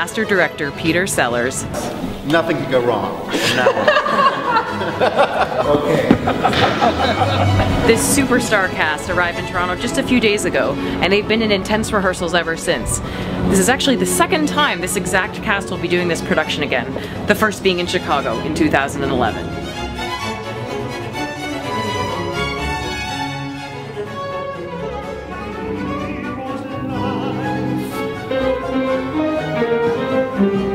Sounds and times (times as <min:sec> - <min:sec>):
Classical music: 0:00.0 - 0:30.7.